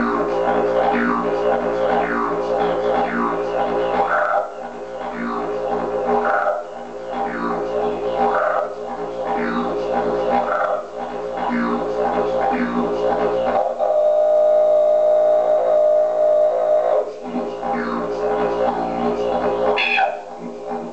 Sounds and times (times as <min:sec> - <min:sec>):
Didgeridoo: 0:00.0 - 0:20.9.